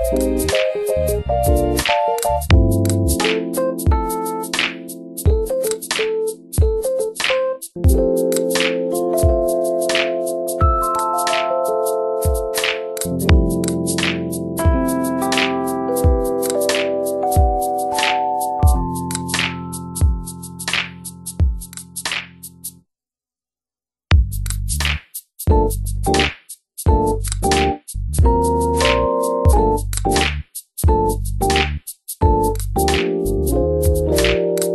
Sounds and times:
Electric piano: 0.0 - 21.9, 26.9 - 30.3, 30.9 - 34.7.

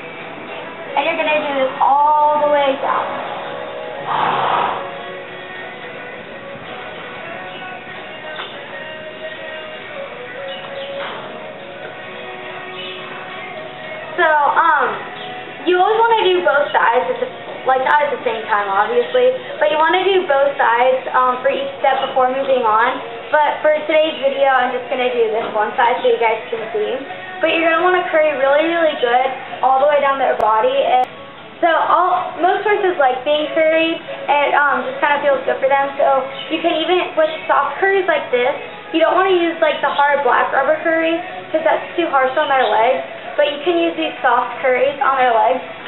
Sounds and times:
Music: 0.0 - 45.8
Speech: 1.0 - 3.1, 14.2 - 15.0, 15.6 - 45.7.

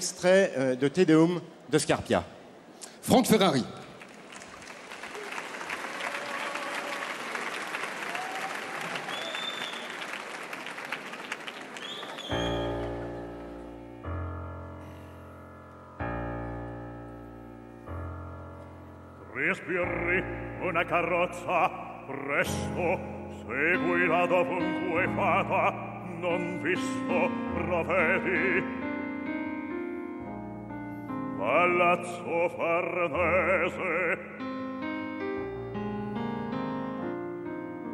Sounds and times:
Speech: 3.0 - 3.8.

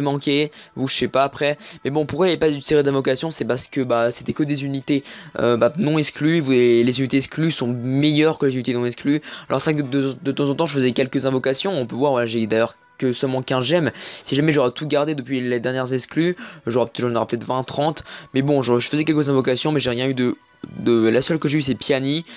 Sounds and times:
Speech: 0.0 - 22.3.

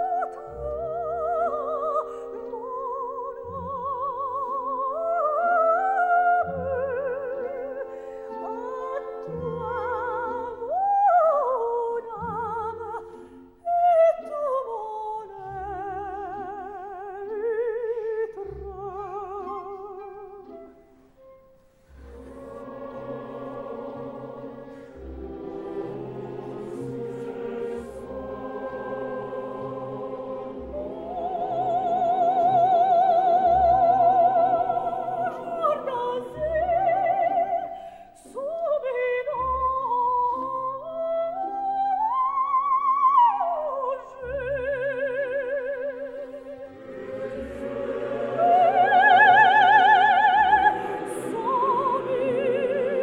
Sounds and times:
Opera: 0.0 - 53.0.

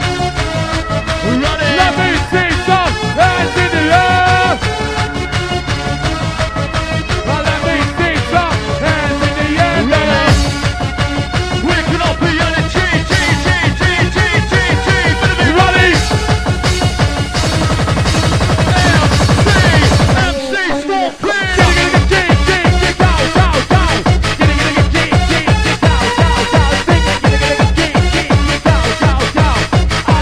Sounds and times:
Music: 0.0 - 30.2.

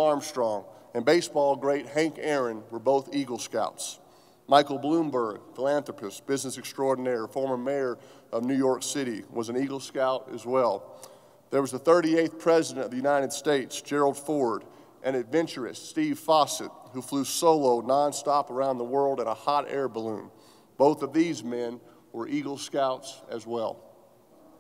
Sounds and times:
Male speech, man speaking: 0.0 - 10.8, 11.6 - 23.8
Narration, monologue: 0.0 - 24.6.

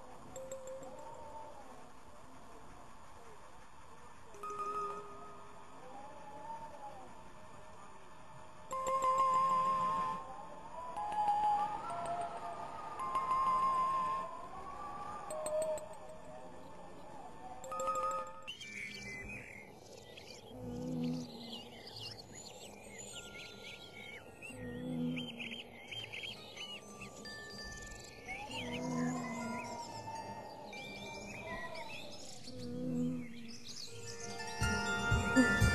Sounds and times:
Wind: 0.0 - 35.7.

